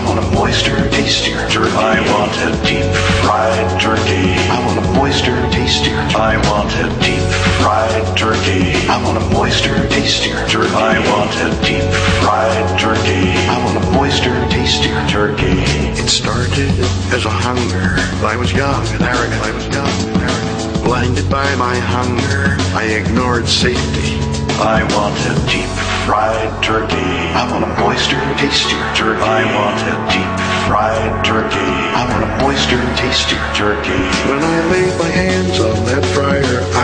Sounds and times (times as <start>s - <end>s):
Music: 0.0s - 36.8s.